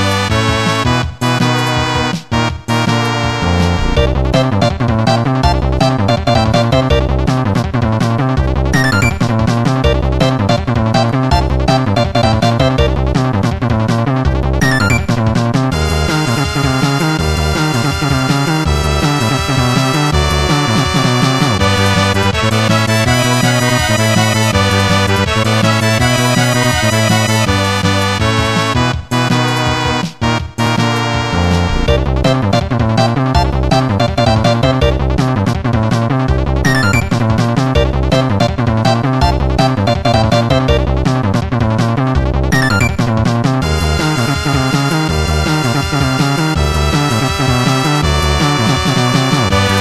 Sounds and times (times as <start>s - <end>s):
Video game music: 0.0s - 49.8s.